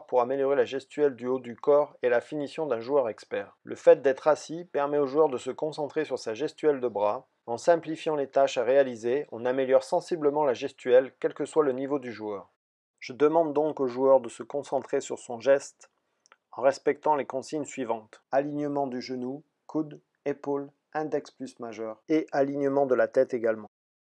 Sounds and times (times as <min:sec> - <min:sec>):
Speech: 0:00.0 - 0:15.8, 0:16.6 - 0:23.8.